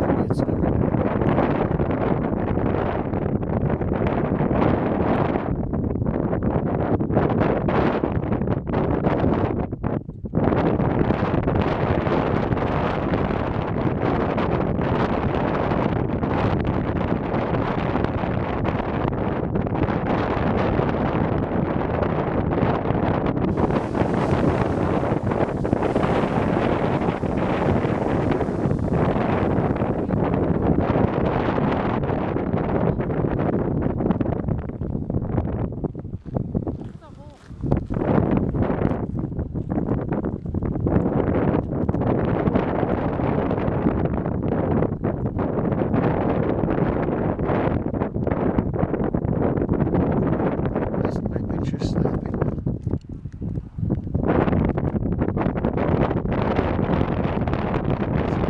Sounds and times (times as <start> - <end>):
Explosion: 23.5 - 32.8.